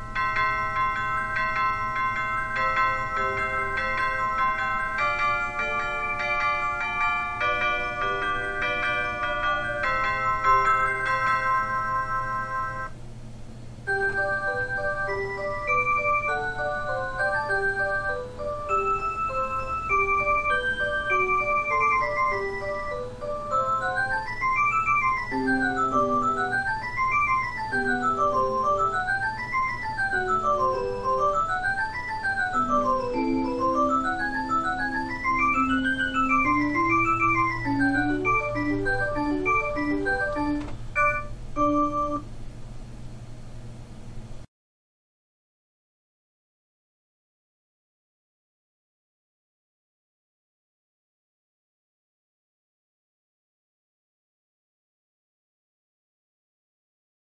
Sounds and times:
Music: 0:00.0 - 0:12.9, 0:13.9 - 0:42.3.

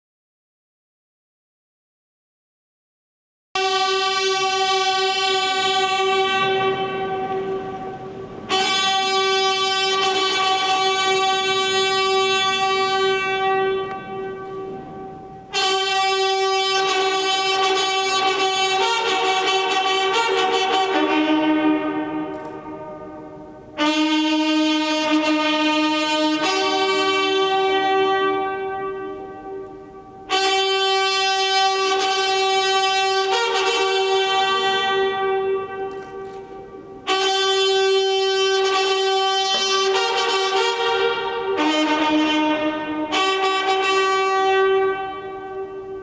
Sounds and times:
Inside, large room or hall: 0:03.6 - 0:46.0
Music: 0:03.6 - 0:46.0.

